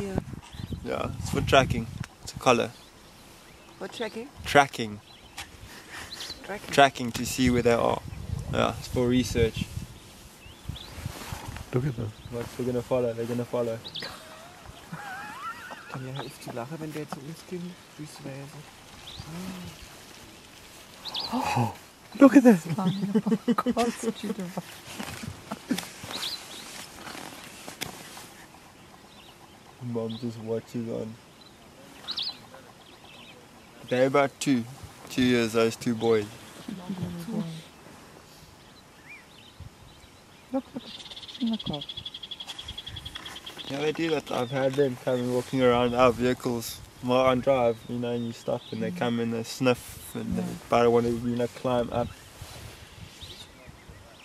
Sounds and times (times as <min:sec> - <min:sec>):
Speech: 0:43.7 - 0:52.2.